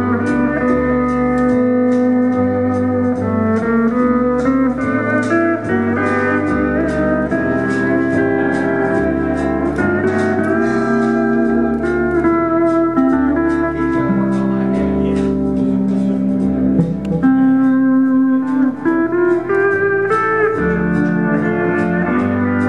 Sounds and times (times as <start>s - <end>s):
Steel guitar, slide guitar: 0.0s - 22.6s.